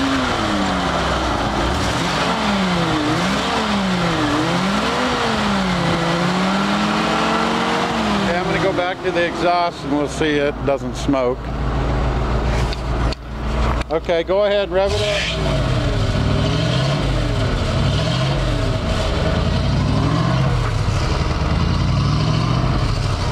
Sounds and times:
Engine: 0.0s - 23.3s
Truck: 0.0s - 23.3s
Speech: 8.2s - 11.4s, 13.9s - 15.4s.

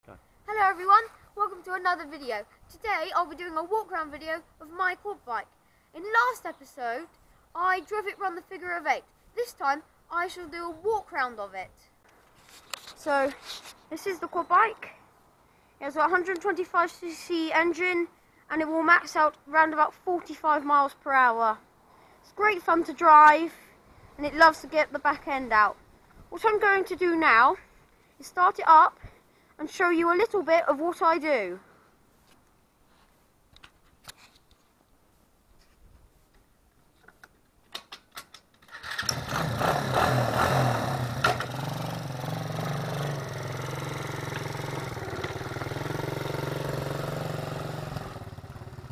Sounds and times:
Speech: 0.0s - 11.9s, 13.0s - 15.0s, 15.8s - 21.6s, 22.2s - 23.6s, 24.2s - 27.6s, 28.2s - 31.6s.

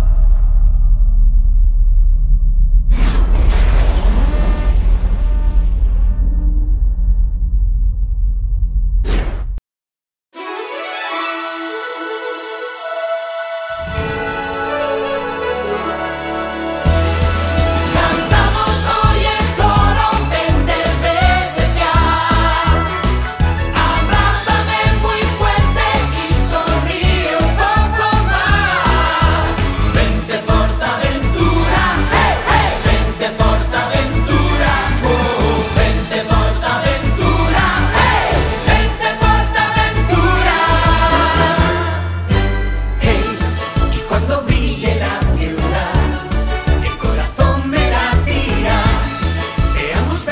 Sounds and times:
Music: 10.3s - 50.3s.

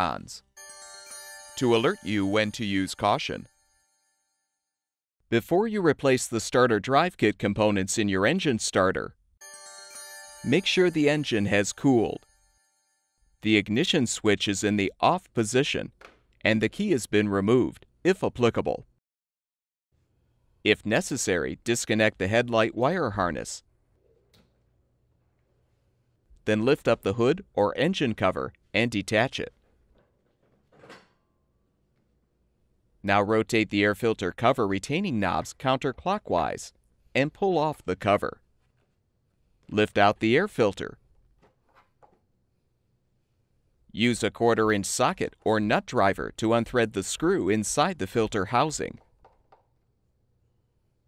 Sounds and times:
Speech: 0.0s - 0.4s, 1.6s - 3.5s, 5.3s - 9.2s, 10.5s - 12.2s, 13.4s - 18.9s, 20.7s - 23.6s, 26.4s - 29.6s, 33.1s - 38.4s, 39.7s - 41.0s, 43.9s - 49.0s.

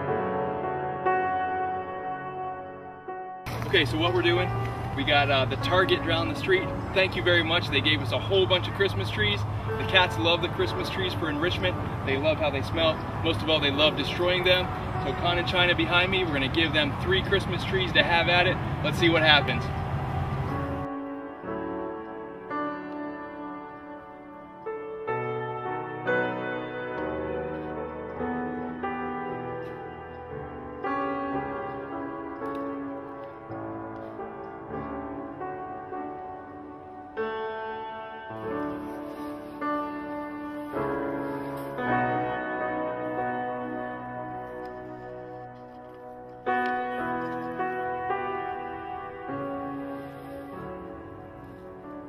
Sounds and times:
Music: 0.0s - 52.0s.

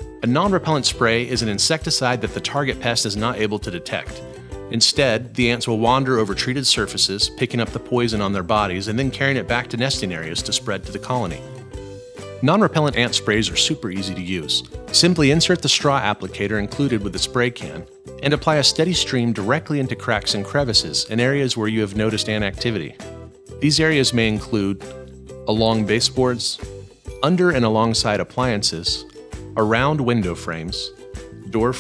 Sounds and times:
Music: 0.0s - 31.8s
Speech: 0.2s - 11.5s, 12.4s - 23.0s, 23.6s - 24.9s, 25.5s - 31.8s.

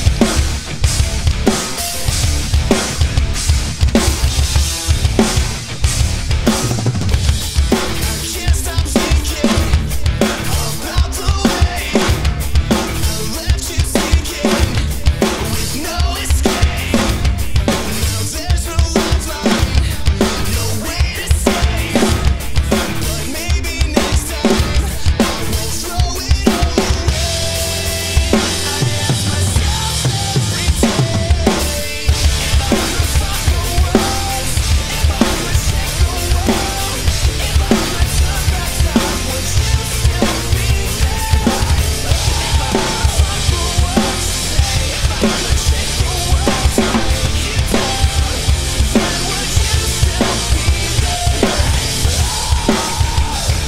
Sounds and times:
Music: 0.0s - 53.6s.

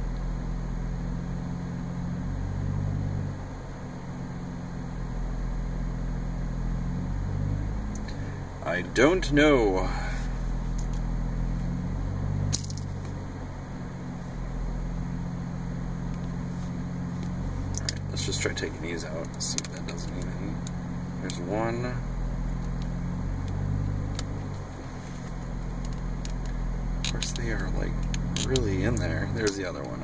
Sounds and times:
Car: 0.0s - 30.0s
Speech: 8.6s - 10.3s, 18.1s - 20.6s, 21.2s - 22.1s, 27.1s - 30.0s.

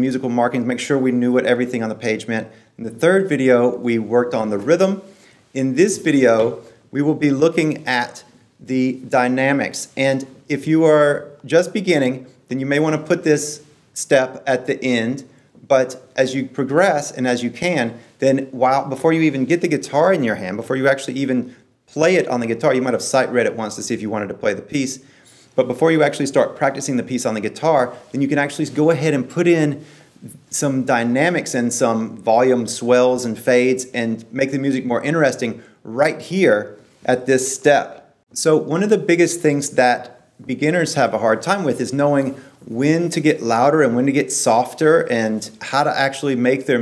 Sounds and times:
Speech: 0.0s - 46.8s.

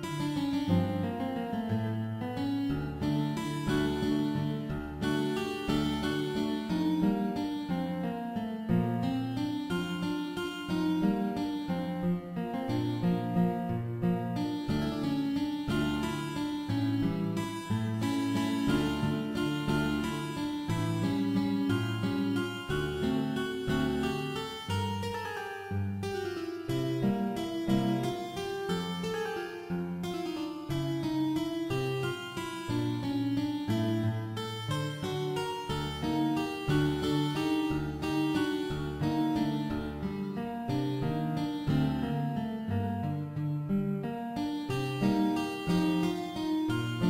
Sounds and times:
Harpsichord: 0.0s - 43.4s, 44.1s - 47.1s.

